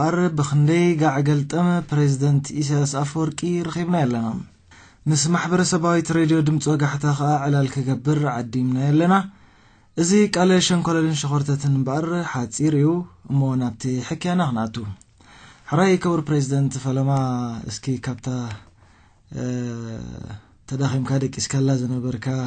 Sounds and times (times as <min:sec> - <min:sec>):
Speech: 0:00.0 - 0:09.3, 0:10.0 - 0:15.0, 0:15.7 - 0:18.7, 0:19.3 - 0:22.4.